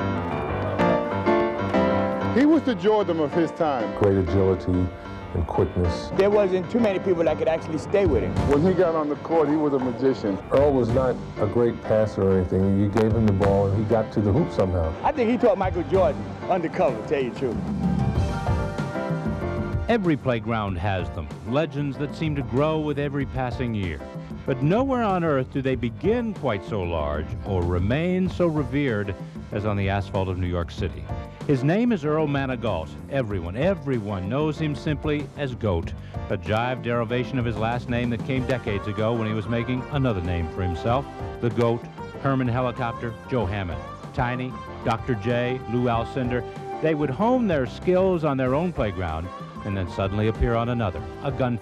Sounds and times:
Music: 0.0 - 51.6
Speech: 2.4 - 17.6, 19.9 - 51.6.

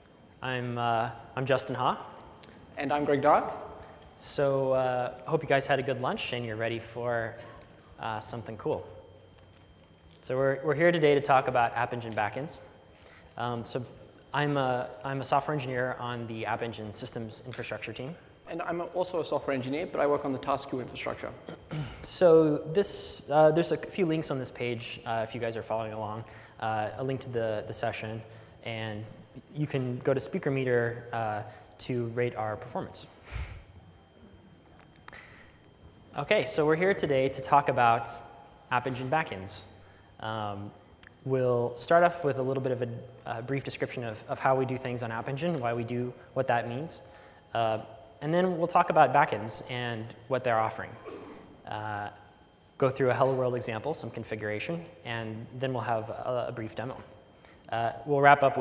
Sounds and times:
Speech: 0.4 - 2.2, 2.8 - 9.0, 10.2 - 12.7, 13.4 - 33.2, 36.2 - 58.6.

